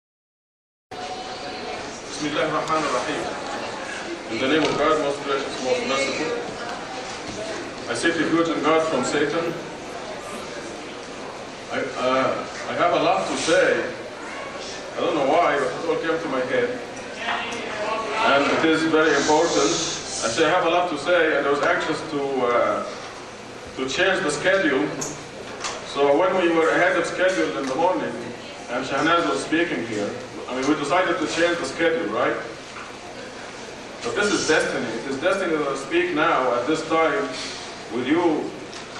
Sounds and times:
Male speech, man speaking: 2.1s - 3.3s, 4.3s - 6.5s, 7.9s - 9.6s, 11.7s - 14.0s, 15.0s - 23.0s, 23.8s - 25.0s, 25.9s - 32.5s, 34.0s - 38.6s
Narration, monologue: 14.9s - 38.9s.

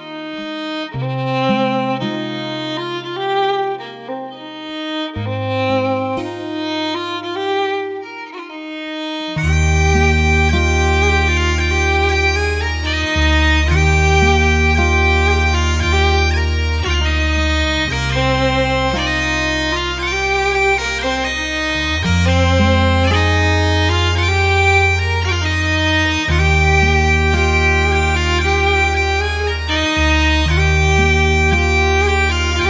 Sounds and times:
Music: 0.0s - 32.6s.

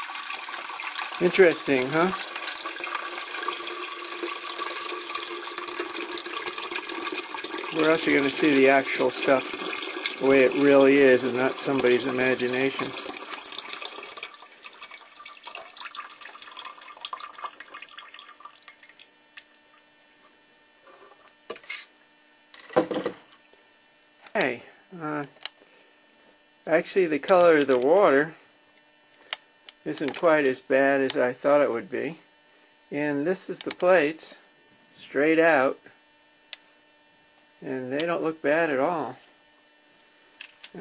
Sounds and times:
Speech: 1.2s - 2.2s, 7.8s - 9.5s, 10.2s - 13.0s, 24.3s - 25.3s, 26.7s - 28.4s, 29.8s - 32.2s, 32.9s - 35.9s, 37.6s - 39.3s.

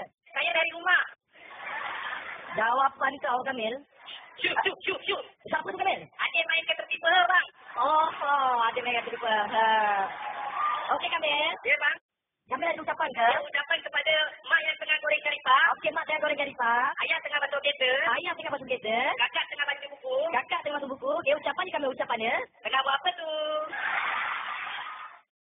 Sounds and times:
Speech: 10.9s - 23.7s.

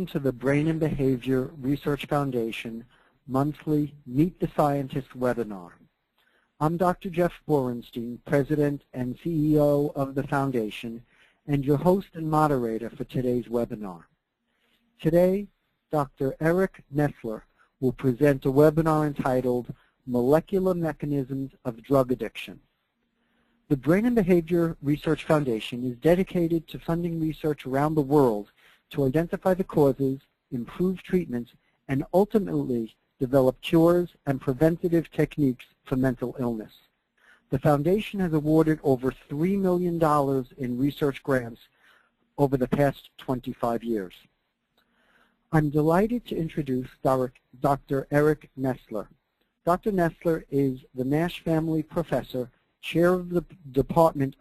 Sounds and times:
Speech: 0.0s - 5.8s, 6.6s - 14.1s, 15.0s - 22.7s, 23.7s - 36.9s, 37.5s - 41.7s, 42.4s - 44.4s, 45.5s - 54.4s.

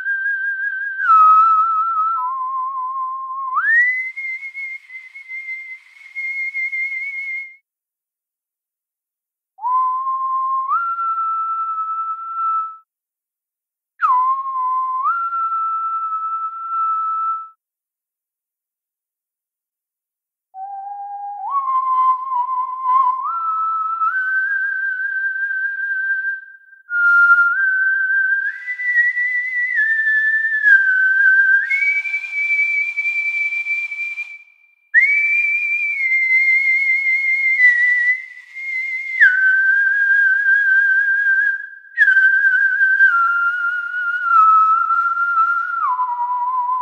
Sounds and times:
Whistling: 0.0s - 7.7s, 9.6s - 12.9s, 14.0s - 17.6s, 20.6s - 46.8s.

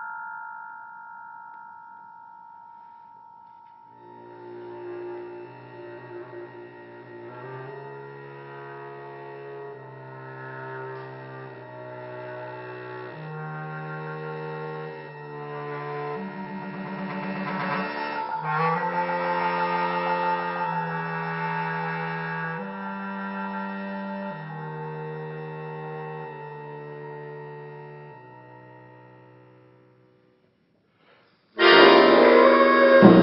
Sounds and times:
Percussion: 0.0s - 6.4s, 13.2s - 23.4s, 31.2s - 33.2s.

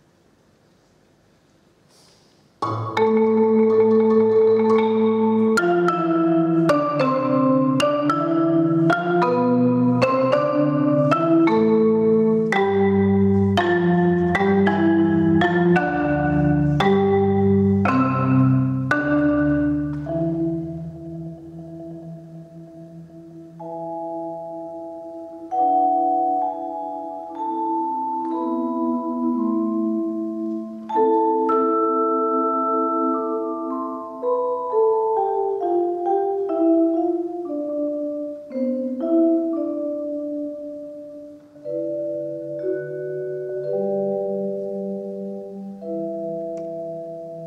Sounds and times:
Marimba, xylophone: 2.6s - 47.4s
Vibraphone: 2.6s - 47.4s.

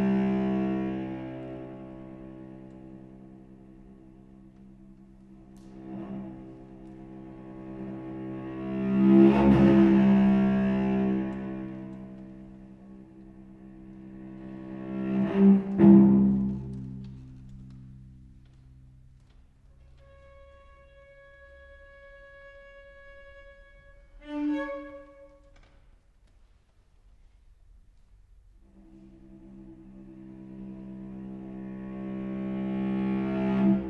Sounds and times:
Double bass: 0.0s - 25.5s, 28.6s - 33.9s
Cello: 0.0s - 33.9s.

